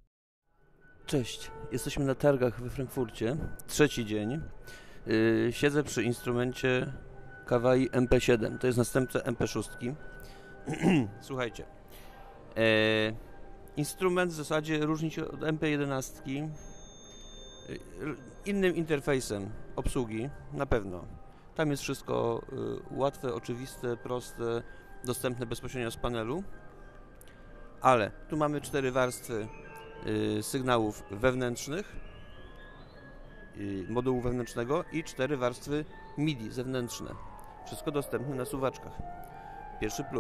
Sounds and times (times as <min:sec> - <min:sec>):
Speech: 0:01.1 - 0:04.5, 0:05.1 - 0:10.0, 0:10.7 - 0:11.7, 0:12.6 - 0:13.2, 0:13.8 - 0:16.6, 0:17.7 - 0:26.5, 0:27.8 - 0:31.9, 0:33.6 - 0:39.0, 0:39.8 - 0:40.2.